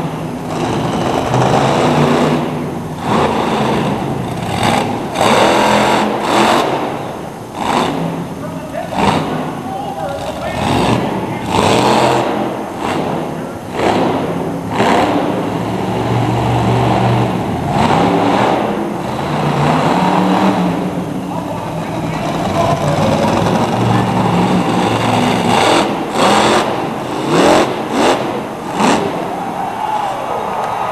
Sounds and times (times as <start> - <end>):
Car: 0.0 - 30.9
Truck: 0.0 - 30.9
Speech: 8.4 - 11.6, 21.3 - 24.2.